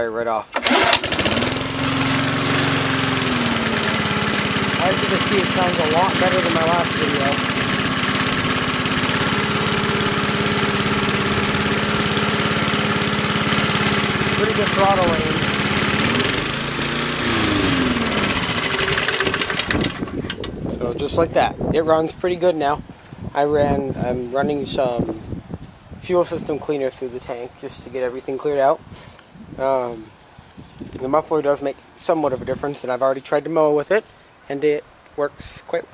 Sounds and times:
Speech: 0.0s - 0.5s, 4.8s - 7.5s, 14.4s - 15.4s, 20.7s - 22.8s, 23.4s - 25.2s, 26.0s - 28.8s, 29.6s - 30.1s, 31.0s - 35.9s
Lawn mower: 0.5s - 20.5s.

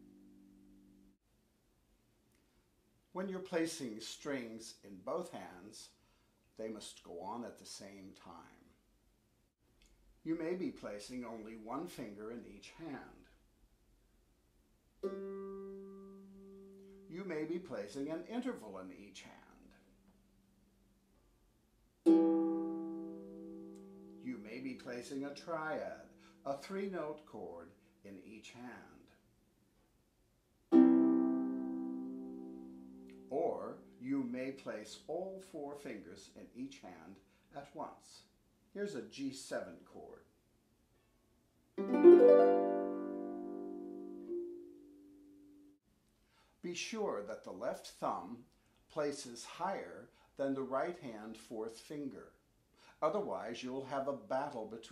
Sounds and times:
Speech: 3.1s - 6.0s, 6.6s - 8.8s, 10.2s - 13.4s, 17.1s - 19.9s, 24.2s - 29.2s, 33.3s - 40.3s, 46.6s - 54.9s
Plucked string instrument: 15.0s - 17.1s, 22.1s - 24.2s, 30.7s - 33.3s, 41.8s - 45.7s
Harp: 22.1s - 24.2s, 30.7s - 34.0s, 41.8s - 45.2s.

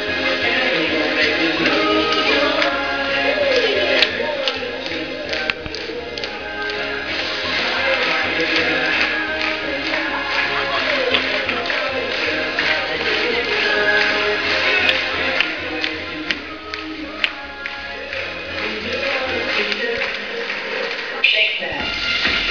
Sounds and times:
Rock and roll: 0.0s - 21.2s, 21.8s - 22.5s.

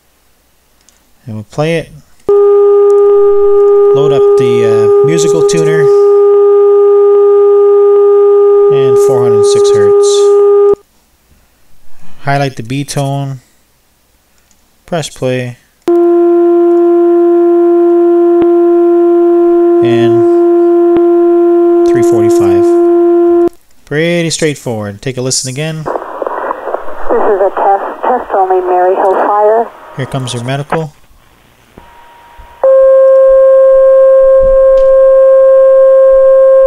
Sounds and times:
Speech: 1.2s - 2.1s, 4.0s - 6.0s, 8.7s - 10.4s, 12.2s - 13.4s, 14.9s - 15.6s, 19.8s - 20.4s, 21.9s - 22.8s, 23.9s - 25.9s, 27.1s - 31.0s.

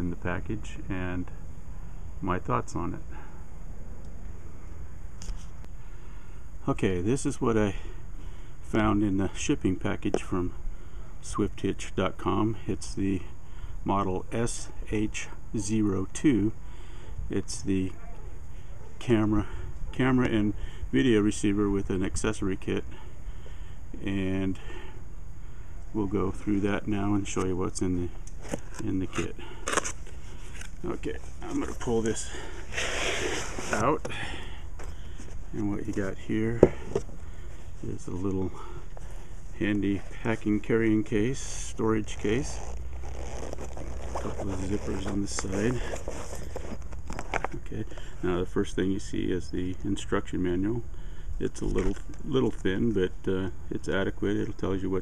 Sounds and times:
Speech: 0.0s - 1.4s, 2.2s - 3.1s, 6.6s - 7.9s, 8.7s - 10.6s, 11.2s - 13.3s, 13.9s - 16.6s, 17.3s - 18.0s, 19.0s - 22.9s, 24.0s - 24.8s, 26.0s - 28.2s, 28.8s - 29.5s, 30.8s - 32.4s, 33.7s - 34.2s, 35.5s - 36.7s, 37.8s - 38.7s, 39.6s - 42.6s, 44.2s - 45.9s, 47.5s - 55.0s.

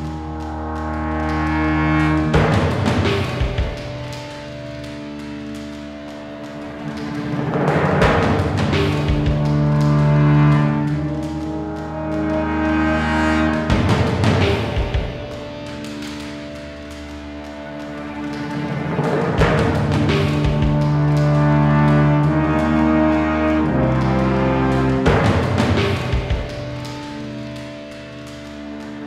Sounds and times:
Timpani: 0.0s - 29.0s.

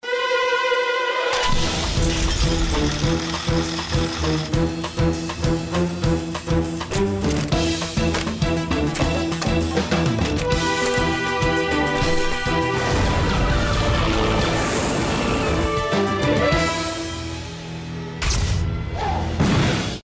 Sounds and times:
Music: 0.0s - 20.0s.

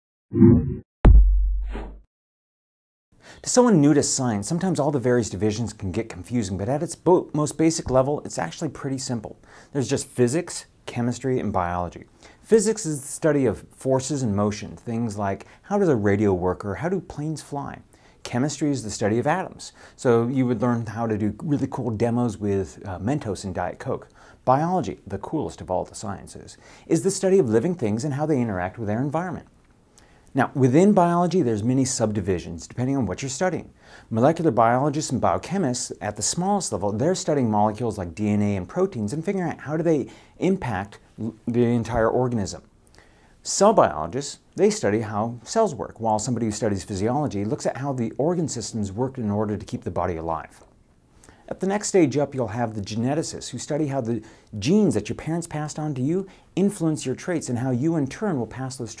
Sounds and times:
Inside, small room: 3.1s - 59.0s
Speech: 3.4s - 29.5s, 30.3s - 42.7s, 43.4s - 50.7s, 51.5s - 59.0s.

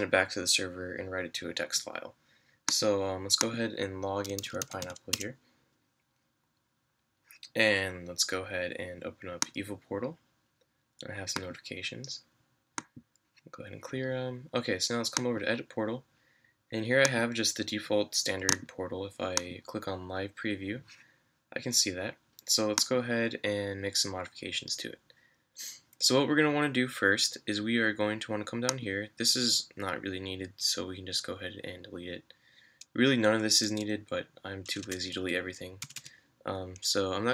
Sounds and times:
Speech: 0.0s - 5.4s, 7.4s - 10.2s, 11.0s - 12.3s, 13.5s - 16.1s, 16.7s - 20.9s, 21.5s - 32.3s, 33.0s - 37.3s.

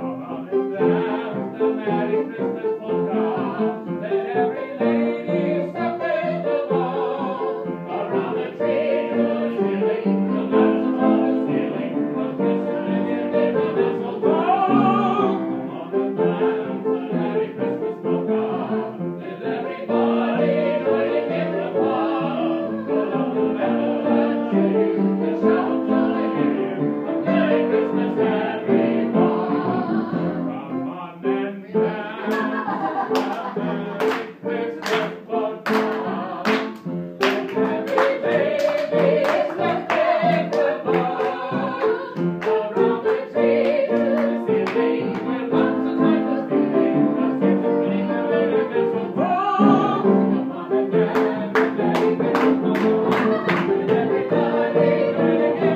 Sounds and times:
Opera: 0.0s - 55.7s
Singing: 0.0s - 55.7s.

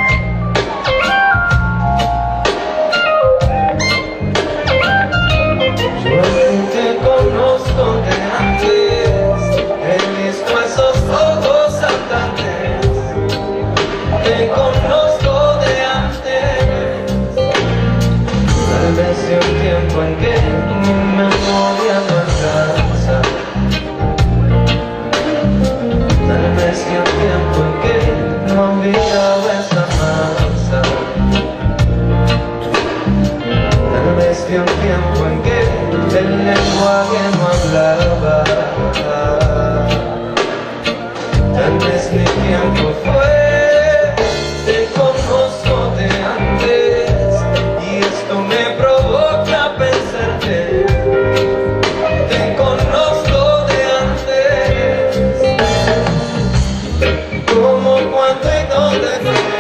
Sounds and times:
New-age music: 0.0s - 59.6s
Rhythm and blues: 0.0s - 59.6s.

